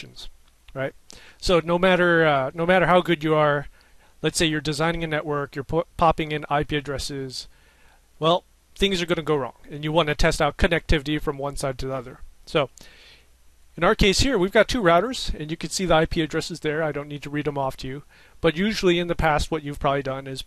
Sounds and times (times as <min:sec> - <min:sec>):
Speech: 0:00.0 - 0:07.5, 0:08.2 - 0:12.8, 0:13.8 - 0:20.4.